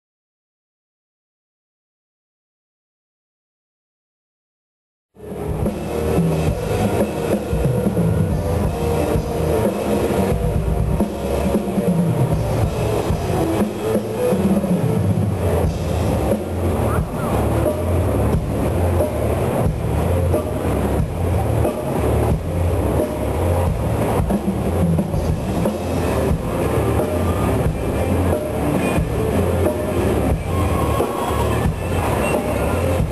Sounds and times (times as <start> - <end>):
Drum kit: 5.2 - 33.1.